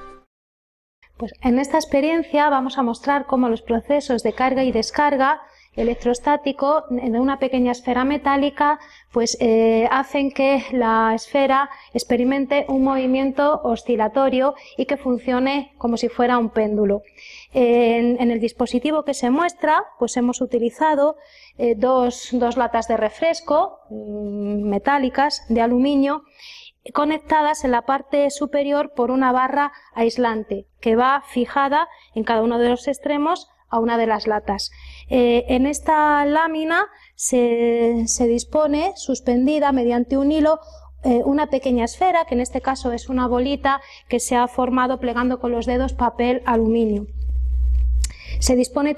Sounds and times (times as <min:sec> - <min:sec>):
Speech: 0:01.2 - 0:47.1, 0:48.1 - 0:48.9.